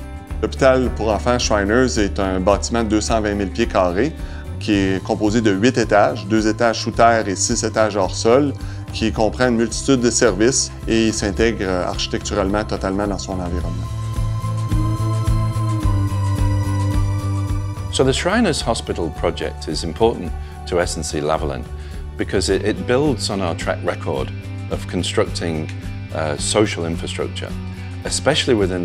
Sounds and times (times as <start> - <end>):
Music: 0.0 - 28.8
Speech: 0.4 - 13.8, 17.9 - 28.8.